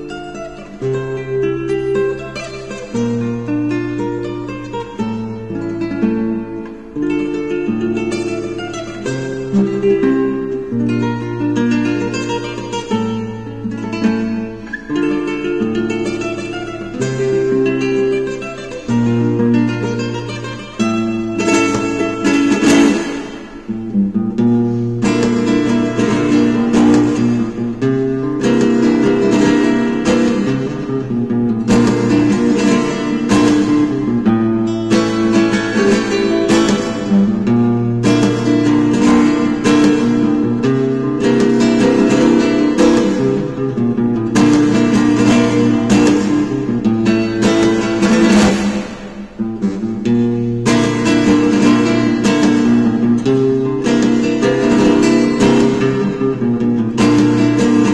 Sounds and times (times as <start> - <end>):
Acoustic guitar: 0.0 - 57.9
Strum: 0.0 - 57.9.